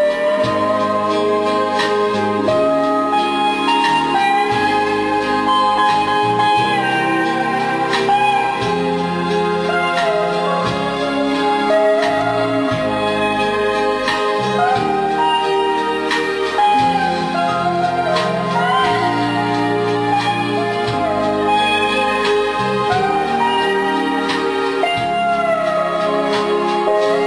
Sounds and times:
Jazz: 0.0 - 27.2.

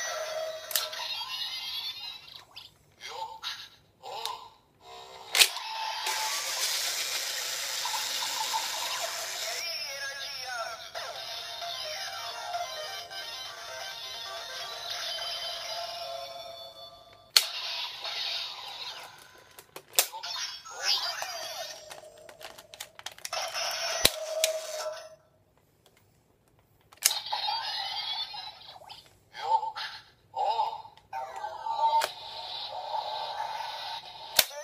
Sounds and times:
Inside, small room: 0.0 - 34.6
Speech: 9.4 - 12.4, 29.4 - 32.1.

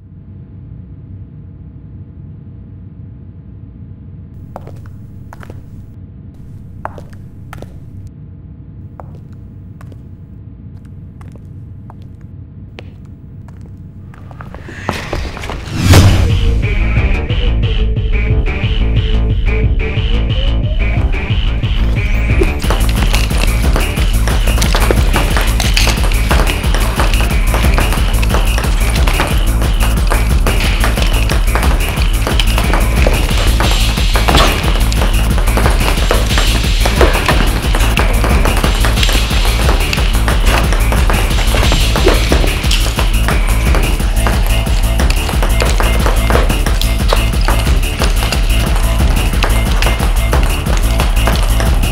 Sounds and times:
Music: 15.1 - 51.9.

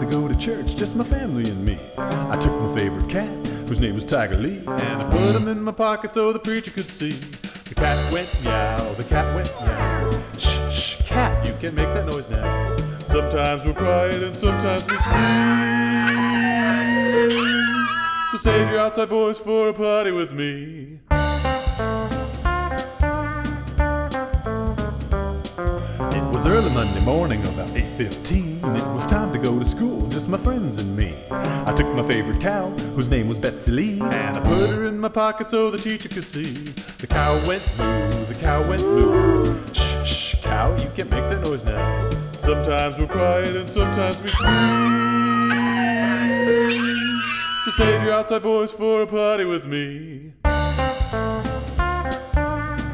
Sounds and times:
Music: 0.0 - 49.6, 50.4 - 52.9.

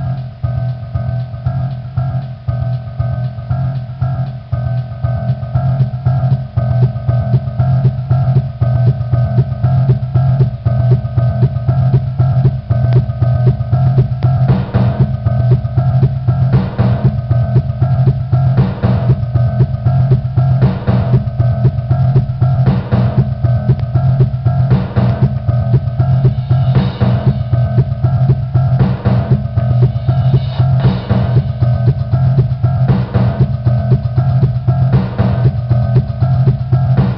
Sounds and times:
Drum: 0.0 - 37.1
Drum machine: 0.0 - 37.1.

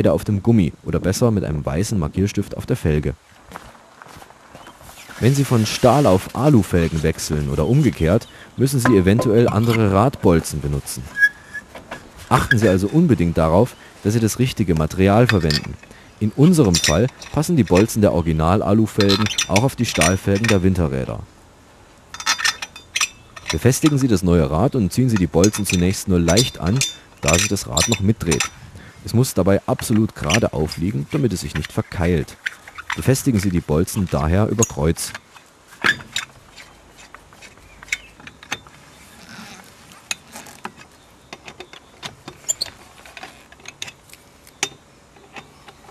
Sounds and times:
Speech: 0.0 - 3.2, 5.2 - 11.2, 12.3 - 21.3, 23.5 - 32.4, 33.0 - 35.2.

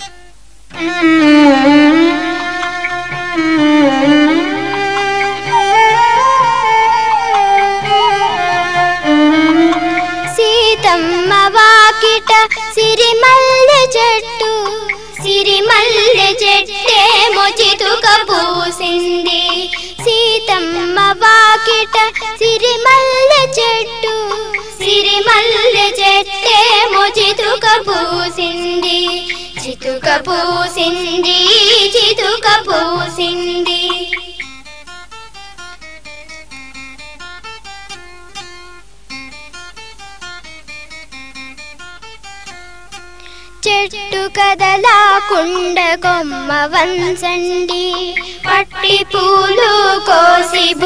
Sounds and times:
Music: 0.0 - 50.8.

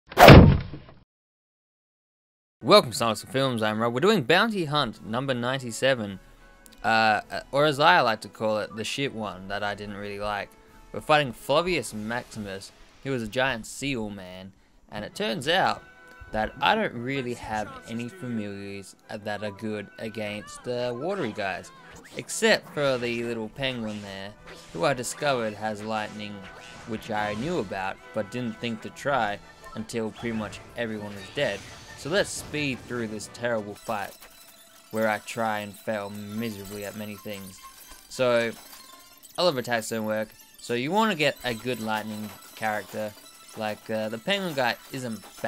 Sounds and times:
Speech: 2.6 - 6.2, 6.8 - 34.2, 35.0 - 38.6, 39.4 - 45.4.

